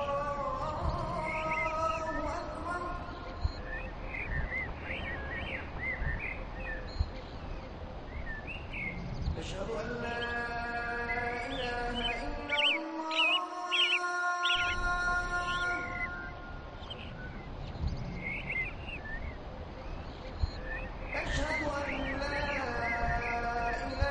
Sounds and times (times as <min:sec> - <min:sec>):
Bird vocalization, bird call, bird song: 0:00.0 - 0:24.1.